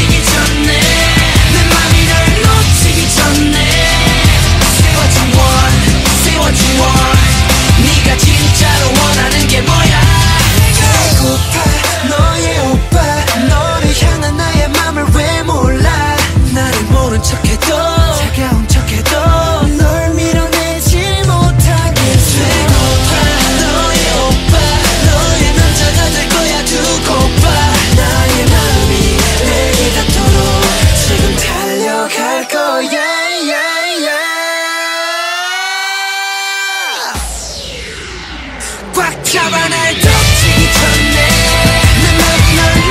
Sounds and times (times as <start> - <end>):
Singing: 0.0 - 38.0, 38.6 - 42.9
Pop music: 0.0 - 42.9.